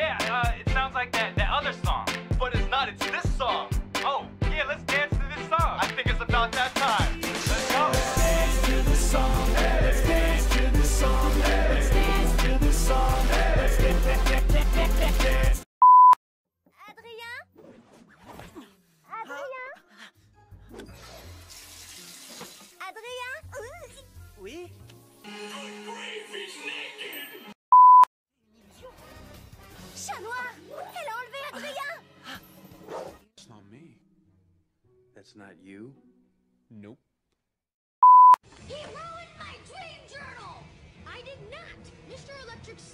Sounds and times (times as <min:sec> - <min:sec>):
Music: 0:00.0 - 0:15.6, 0:19.8 - 0:27.6, 0:28.4 - 0:37.1, 0:38.7 - 0:42.9.